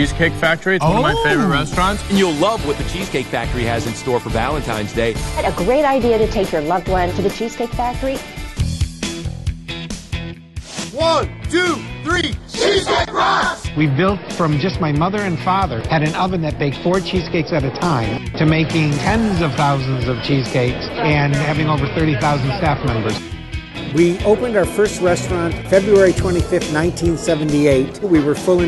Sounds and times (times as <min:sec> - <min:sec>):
Speech: 0:00.0 - 0:08.2, 0:11.0 - 0:12.4, 0:13.8 - 0:23.2, 0:23.9 - 0:28.6
Music: 0:00.0 - 0:28.6.